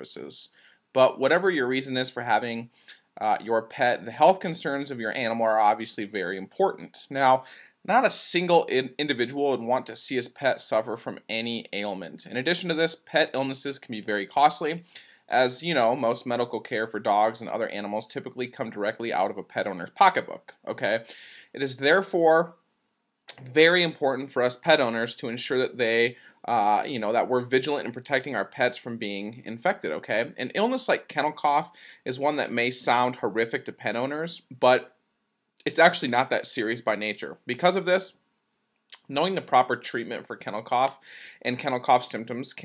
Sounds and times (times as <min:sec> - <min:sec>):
Speech: 0:00.0 - 0:22.5, 0:23.3 - 0:34.9, 0:35.6 - 0:38.2, 0:39.0 - 0:42.6.